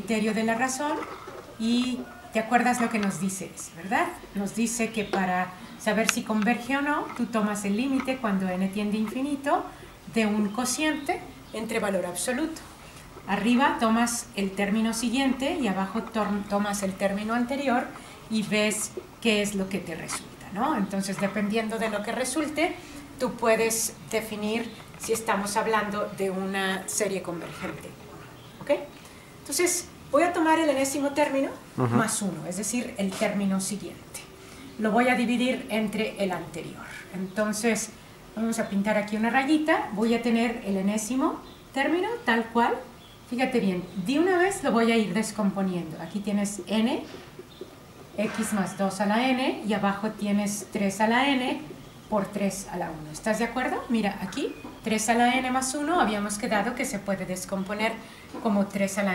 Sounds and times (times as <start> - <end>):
Speech: 0.0 - 12.6, 13.3 - 28.0, 29.5 - 47.1, 48.2 - 59.1.